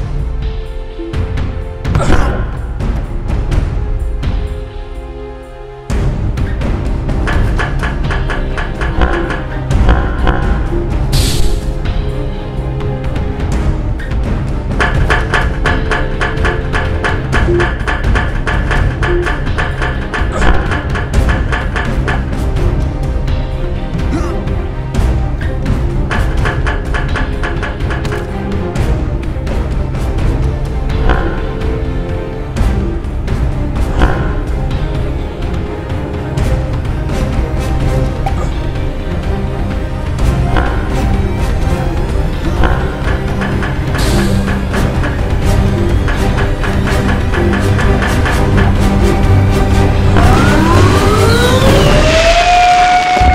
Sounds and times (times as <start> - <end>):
Music: 0.0 - 53.3.